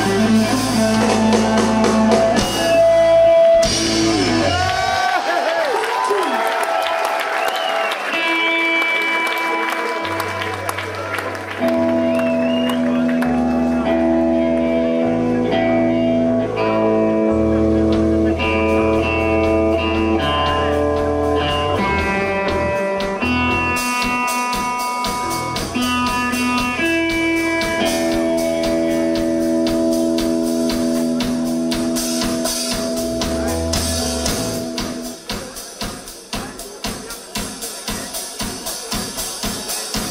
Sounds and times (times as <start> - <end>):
Music: 0.0 - 5.1, 7.5 - 40.1.